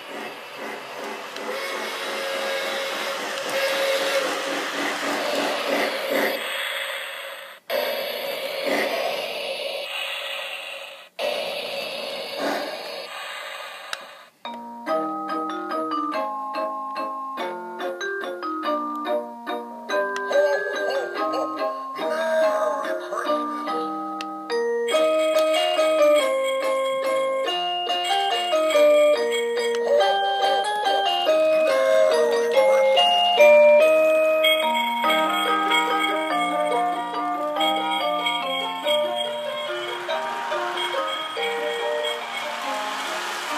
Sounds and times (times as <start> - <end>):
Train: 0.0 - 14.5, 24.9 - 43.5
Music: 14.5 - 43.5.